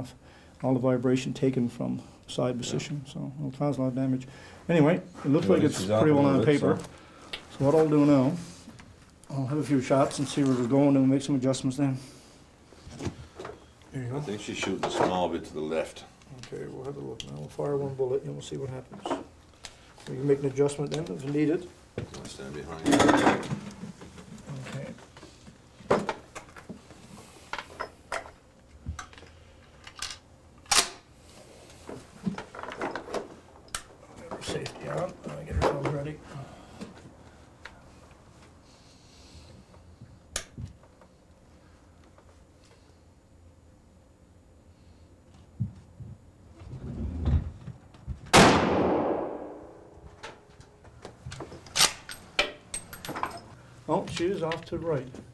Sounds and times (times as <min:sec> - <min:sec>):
Speech: 0:00.0 - 0:06.9, 0:09.3 - 0:12.1, 0:13.9 - 0:19.2, 0:20.0 - 0:23.2, 0:24.5 - 0:25.0, 0:34.2 - 0:36.2, 0:53.9 - 0:55.3.